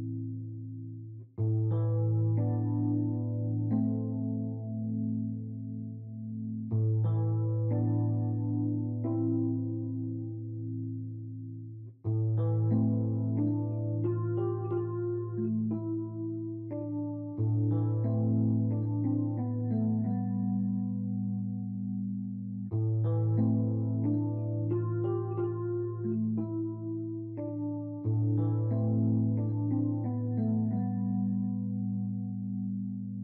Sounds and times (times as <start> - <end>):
Music: 0.0 - 33.2.